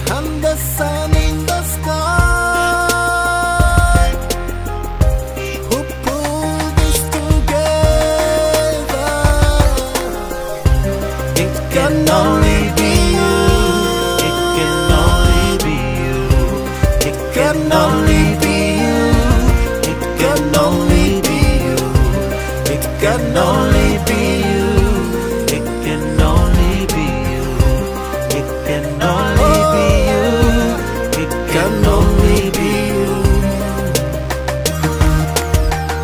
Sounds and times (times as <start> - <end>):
Singing: 0.0 - 4.4, 5.4 - 34.2
Afrobeat: 0.0 - 36.0
Gospel music: 0.0 - 36.0
Hip hop music: 0.0 - 36.0
Rhythm and blues: 0.0 - 36.0
Song: 1.1 - 36.0.